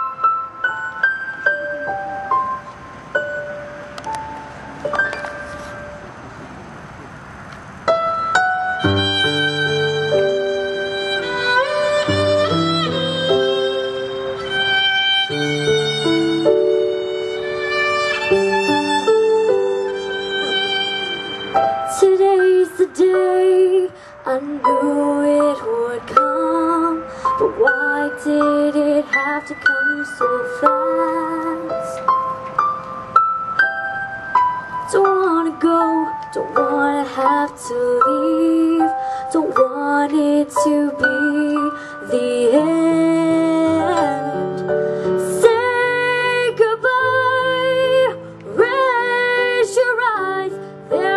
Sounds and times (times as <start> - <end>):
Music: 0.0 - 6.1, 7.9 - 51.1
Female singing: 21.9 - 32.0, 34.9 - 44.6, 45.2 - 51.1.